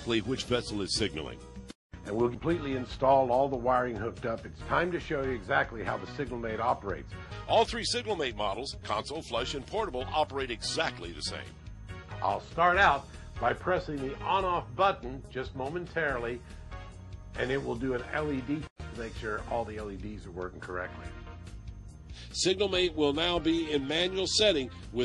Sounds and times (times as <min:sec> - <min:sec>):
Speech: 0:00.0 - 0:01.4, 0:02.1 - 0:11.5, 0:12.2 - 0:16.4, 0:17.4 - 0:21.0, 0:22.4 - 0:25.0
Music: 0:00.0 - 0:25.0.